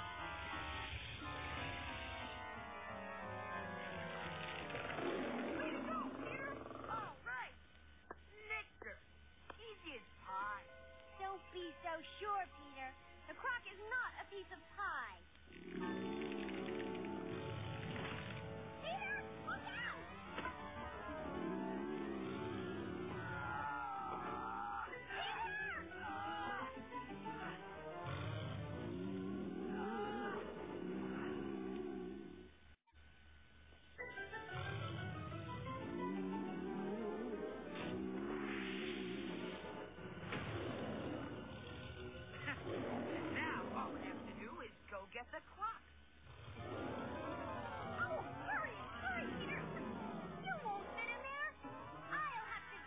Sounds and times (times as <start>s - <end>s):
Music: 0.0s - 7.1s, 9.5s - 32.0s, 33.9s - 44.2s, 46.5s - 52.8s.